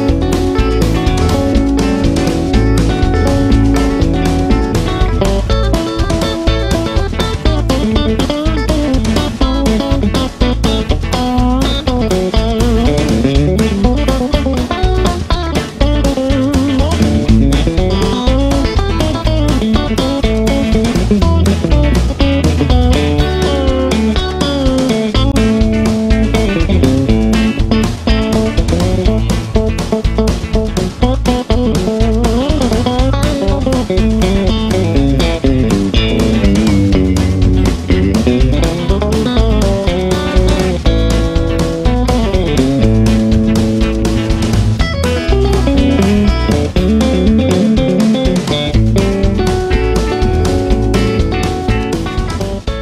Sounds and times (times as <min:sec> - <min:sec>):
Strum: 0:00.0 - 0:52.8.